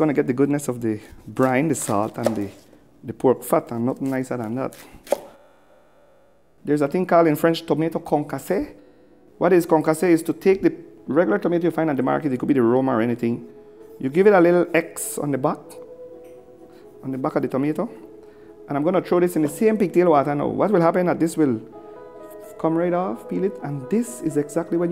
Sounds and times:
Speech: 0.0 - 4.8, 6.6 - 8.8, 9.4 - 13.4, 14.0 - 15.8, 17.0 - 18.0, 18.7 - 21.6, 22.6 - 24.9
Music: 0.0 - 24.9.

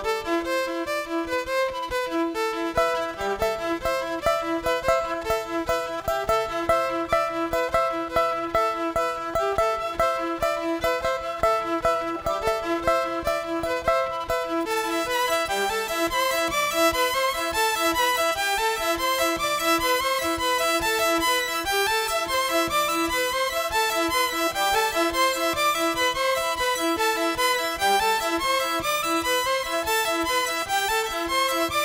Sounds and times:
Music: 0.0 - 31.8.

